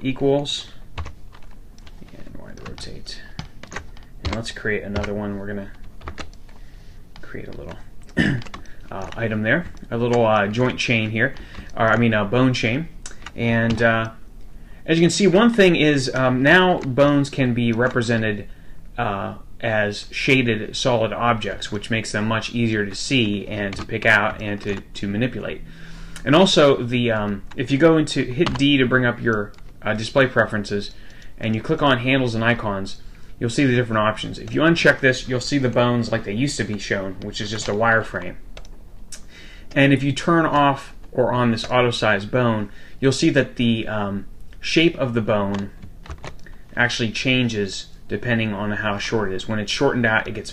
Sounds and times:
Speech: 0.0s - 0.8s, 2.0s - 3.4s, 4.2s - 5.8s, 7.2s - 14.2s, 14.9s - 25.6s, 26.2s - 38.4s, 39.7s - 45.8s, 46.8s - 50.5s.

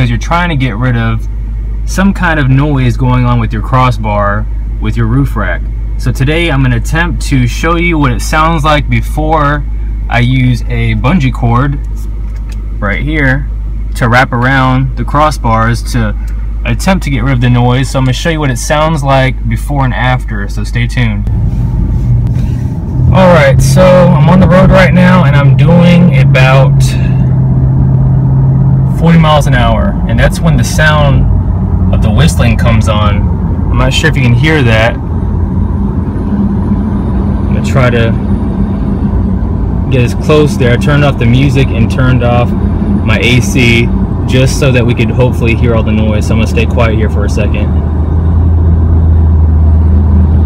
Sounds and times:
Speech: 0.0s - 1.3s, 1.9s - 11.9s, 12.8s - 21.3s, 23.1s - 27.2s, 28.9s - 31.3s, 32.0s - 35.0s, 37.5s - 38.2s, 39.9s - 47.8s.

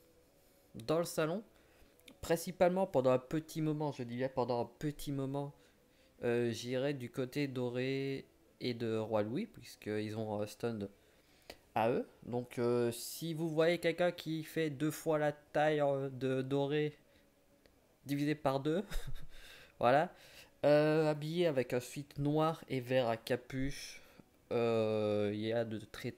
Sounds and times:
Speech: 0.8s - 1.5s, 2.2s - 5.6s, 6.2s - 10.9s, 11.8s - 17.0s, 18.1s - 18.9s, 19.8s - 26.1s.

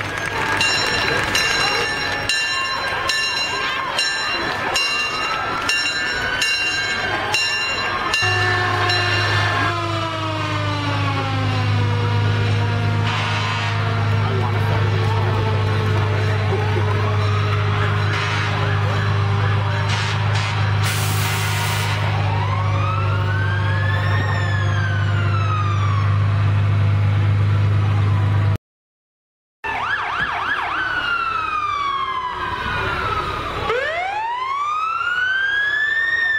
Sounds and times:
Siren: 0.0s - 27.1s, 29.6s - 36.3s
Emergency vehicle: 0.0s - 28.6s, 29.6s - 36.3s.

